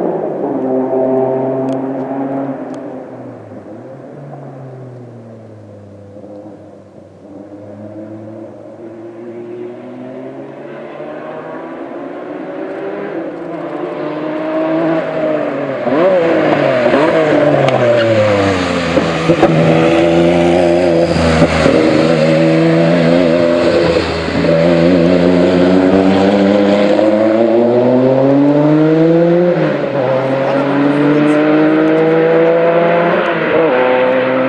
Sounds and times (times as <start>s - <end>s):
Speech: 30.0s - 31.6s.